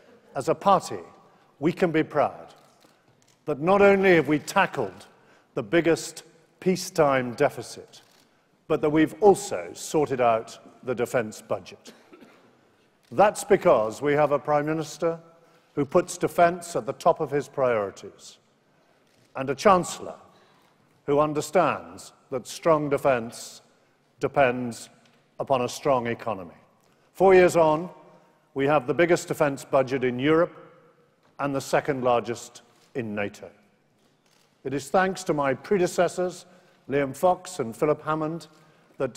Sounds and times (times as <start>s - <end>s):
Male speech, man speaking: 0.4s - 2.6s, 3.5s - 8.0s, 8.7s - 11.9s, 13.1s - 15.2s, 15.8s - 18.4s, 19.4s - 20.2s, 21.1s - 26.6s, 27.2s - 28.0s, 28.6s - 30.6s, 31.4s - 33.6s, 34.7s - 39.1s.